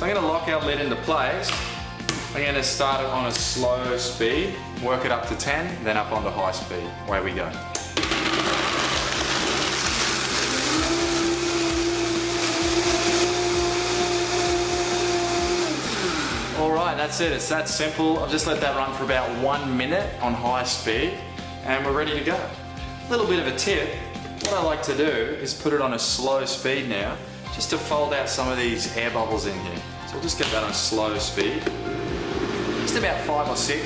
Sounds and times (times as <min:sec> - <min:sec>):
Blender: 0:08.0 - 0:16.7, 0:31.7 - 0:33.2.